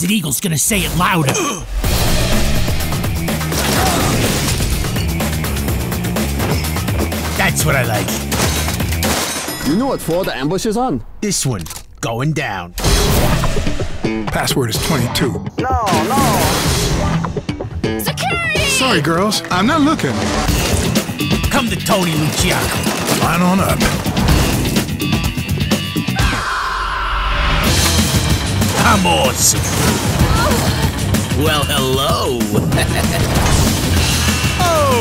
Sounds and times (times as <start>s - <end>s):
Speech: 0.0s - 1.6s, 7.4s - 8.2s, 9.6s - 12.8s, 14.3s - 17.2s, 18.0s - 20.2s, 21.5s - 23.8s, 28.8s - 29.7s, 31.4s - 32.6s, 34.6s - 35.0s
Music: 0.8s - 11.8s, 12.7s - 35.0s.